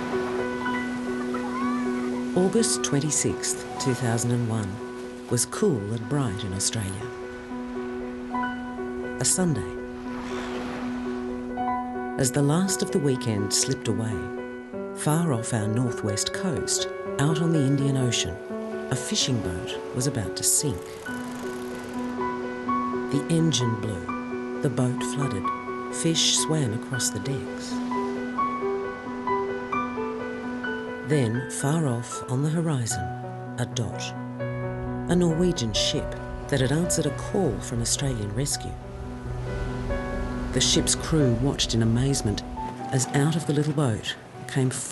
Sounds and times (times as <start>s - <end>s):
Music: 0.0s - 44.9s
Speech: 2.4s - 7.1s, 9.2s - 9.8s, 12.2s - 14.3s, 15.0s - 20.8s, 23.1s - 27.8s, 31.1s - 34.2s, 35.1s - 38.8s, 40.6s - 44.9s.